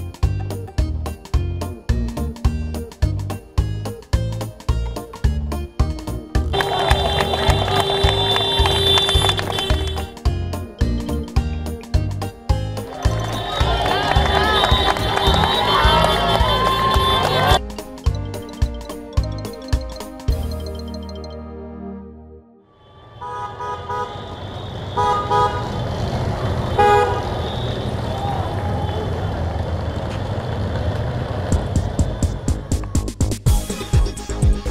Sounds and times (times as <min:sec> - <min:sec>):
Music: 0:00.0 - 0:22.7, 0:31.6 - 0:34.7
Outside, urban or manmade: 0:00.0 - 0:34.7.